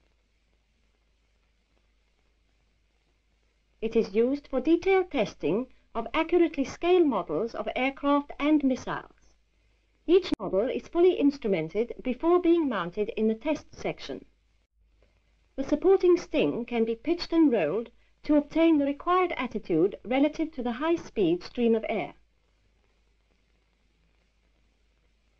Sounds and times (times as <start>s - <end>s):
Speech: 3.8s - 9.3s, 10.1s - 14.3s, 15.6s - 22.2s.